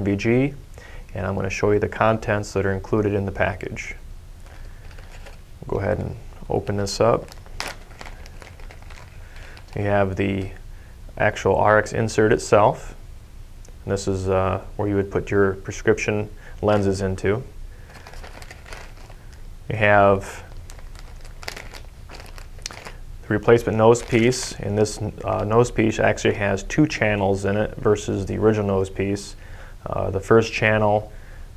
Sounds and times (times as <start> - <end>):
Speech: 0.0 - 4.0, 5.6 - 7.3, 9.8 - 10.6, 11.2 - 13.0, 13.8 - 17.5, 19.7 - 20.5, 23.2 - 31.1
Inside, small room: 0.0 - 31.5.